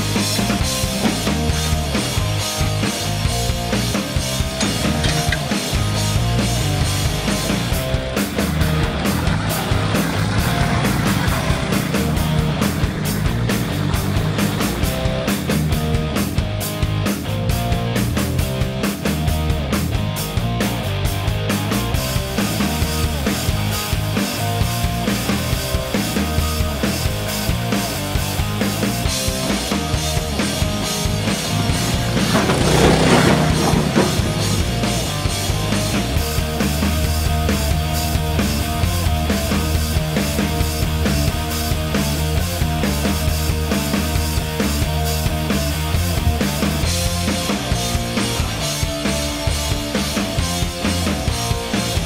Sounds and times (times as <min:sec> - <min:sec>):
Music: 0:00.0 - 0:52.0.